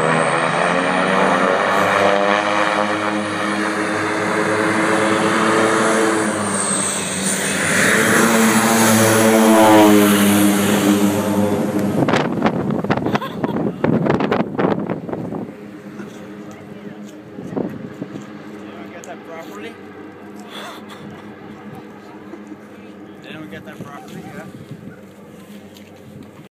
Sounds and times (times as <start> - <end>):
Speech: 18.6 - 19.8, 21.6 - 24.6.